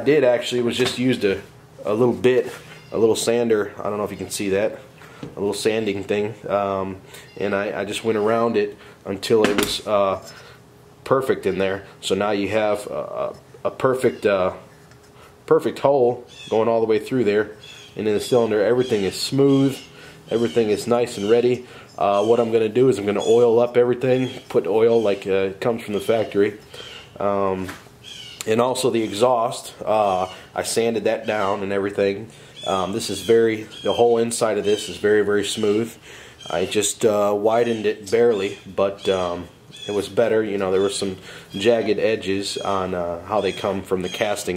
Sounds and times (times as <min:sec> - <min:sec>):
Speech: 0:00.0 - 0:10.3, 0:11.0 - 0:14.7, 0:15.5 - 0:26.6, 0:27.2 - 0:27.8, 0:28.4 - 0:44.5.